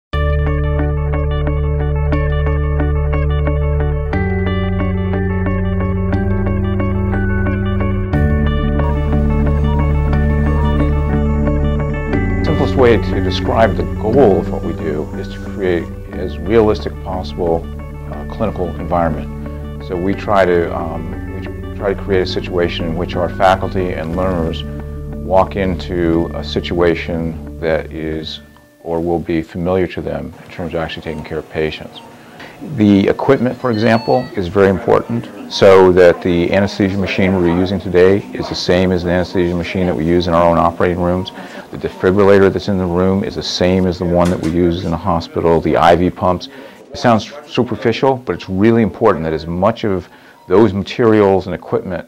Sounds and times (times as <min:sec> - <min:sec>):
Music: 0:00.2 - 0:31.8, 0:32.5 - 0:51.4
Speech: 0:12.4 - 0:52.0.